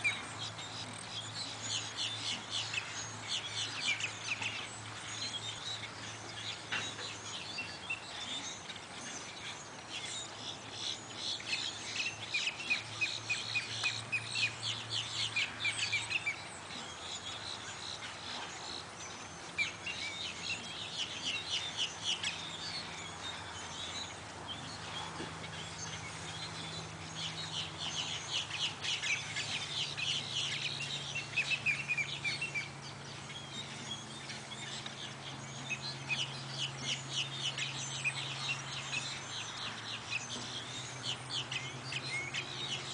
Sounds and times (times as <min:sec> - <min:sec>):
Chirp, tweet: 0:00.0 - 0:42.9.